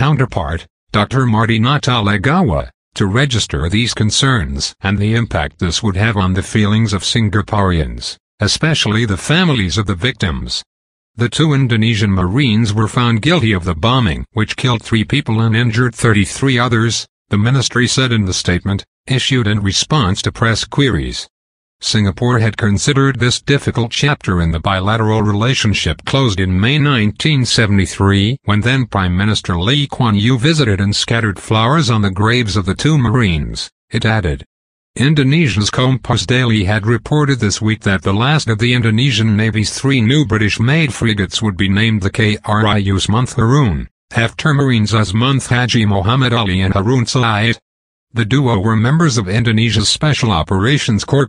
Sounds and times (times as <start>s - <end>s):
Speech: 0.0s - 51.2s.